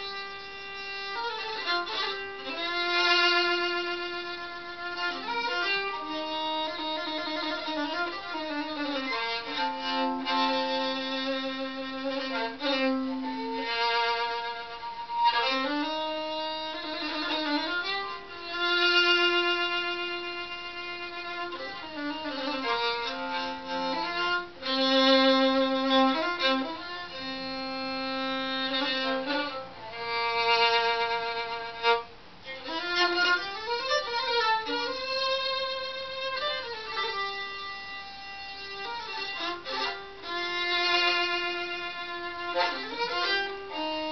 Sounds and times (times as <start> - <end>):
Violin, fiddle: 0.0 - 44.1.